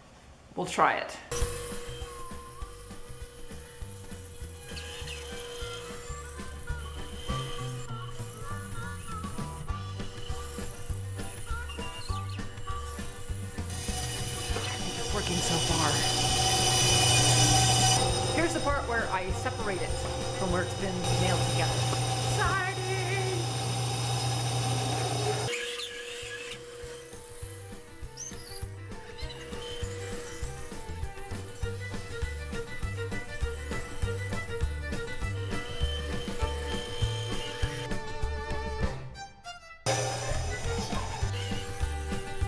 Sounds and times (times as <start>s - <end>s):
Music: 1.3s - 25.5s, 26.5s - 42.4s.